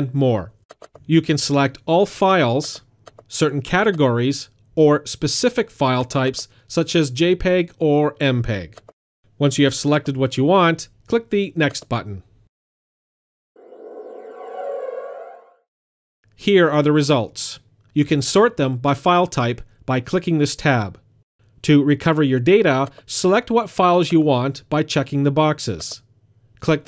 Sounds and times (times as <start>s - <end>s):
Speech: 0.0s - 8.8s, 9.4s - 12.3s, 16.4s - 21.0s, 21.6s - 26.8s.